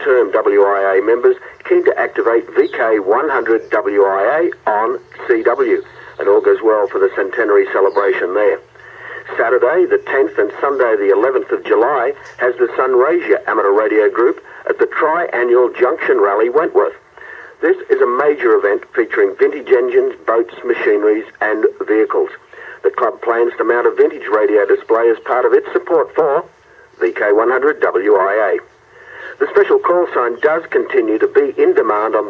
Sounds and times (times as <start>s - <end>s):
Speech: 0.0s - 28.7s, 29.3s - 32.3s
Radio: 0.0s - 32.3s.